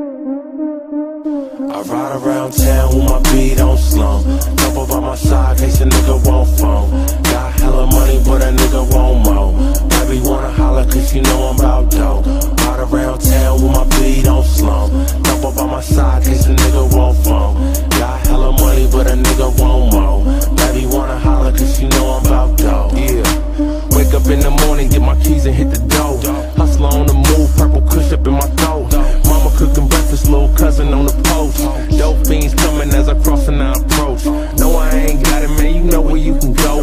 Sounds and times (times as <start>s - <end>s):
Music: 0.0s - 36.8s.